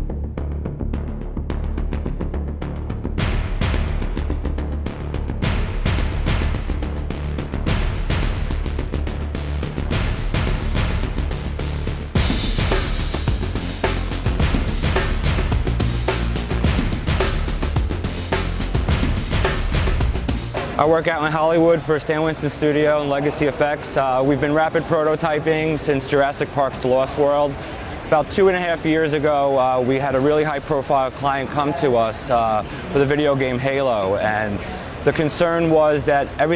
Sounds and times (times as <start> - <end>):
Speech: 20.8 - 36.5.